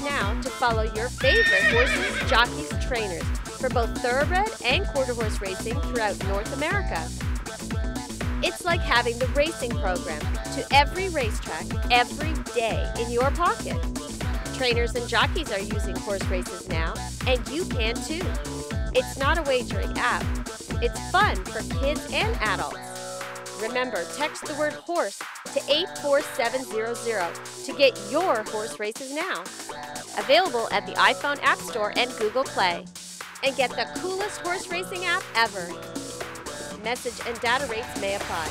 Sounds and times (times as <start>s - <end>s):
Speech: 0.0s - 7.1s, 8.4s - 13.8s, 14.5s - 18.4s, 19.0s - 20.2s, 20.8s - 22.8s, 23.6s - 29.5s, 30.2s - 32.8s, 33.4s - 35.8s, 36.8s - 38.5s
Music: 0.0s - 38.5s.